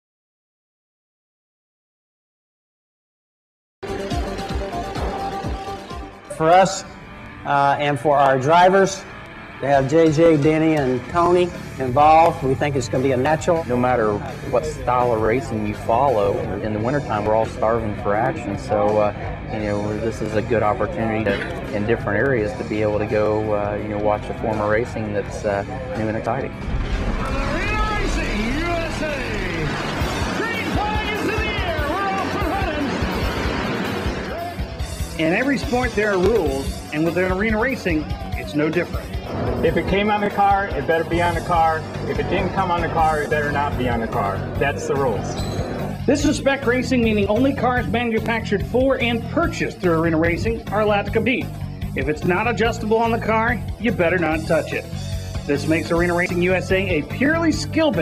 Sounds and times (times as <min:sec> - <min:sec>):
Speech: 0:09.6 - 0:26.5, 0:35.2 - 0:39.0, 0:39.6 - 0:45.4, 0:46.1 - 0:54.9, 0:55.5 - 0:58.0.